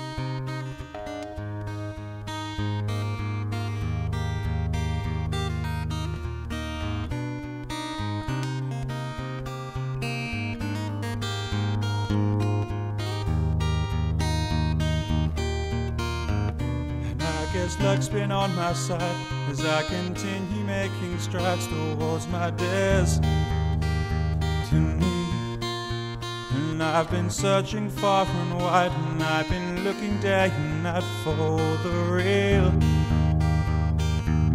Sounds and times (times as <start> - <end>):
Acoustic guitar: 0.0 - 34.5.